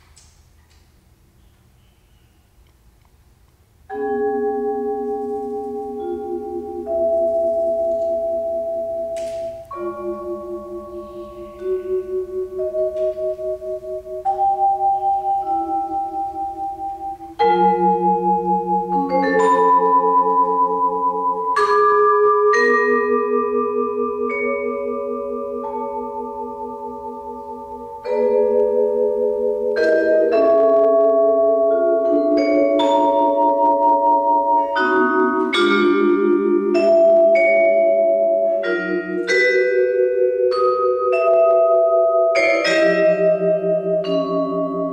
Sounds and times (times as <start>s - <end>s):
Glockenspiel: 3.9s - 44.9s
Marimba, xylophone: 3.9s - 44.9s.